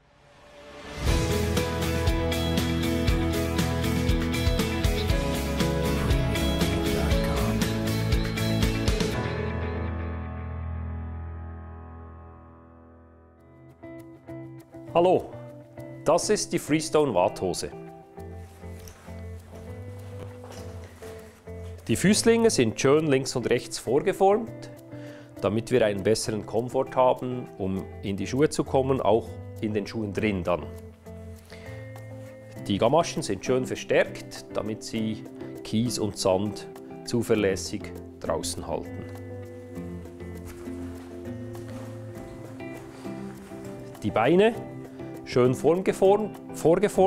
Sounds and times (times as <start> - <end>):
Music: 0.0 - 47.0
Speech: 14.9 - 15.4, 16.0 - 17.8, 21.9 - 24.8, 25.4 - 30.7, 32.6 - 39.0, 44.0 - 44.6, 45.3 - 47.0.